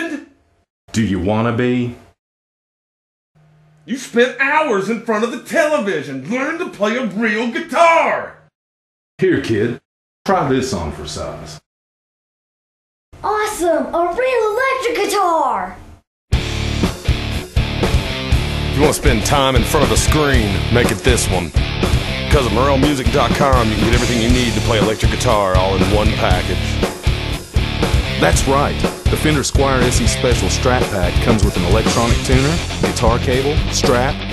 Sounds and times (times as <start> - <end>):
Speech: 0.0 - 2.0, 3.9 - 8.4, 9.2 - 11.7, 13.2 - 15.8, 18.8 - 21.6, 22.3 - 26.8, 28.2 - 34.3.